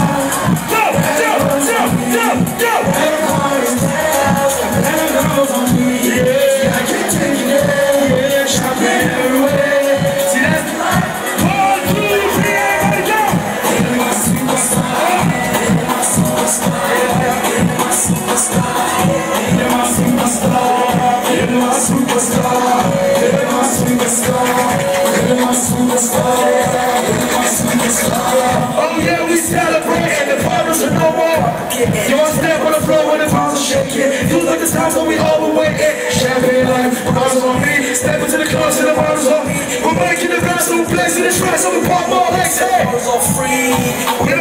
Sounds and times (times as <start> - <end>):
Music: 0.0 - 44.4.